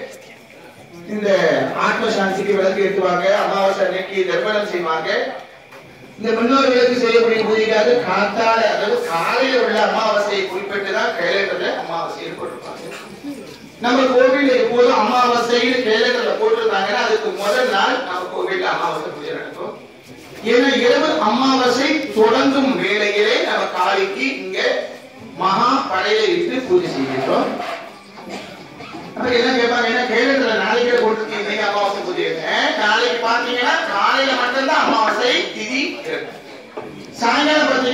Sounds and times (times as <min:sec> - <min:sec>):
Narration, monologue: 0:00.0 - 0:13.0, 0:13.6 - 0:37.9.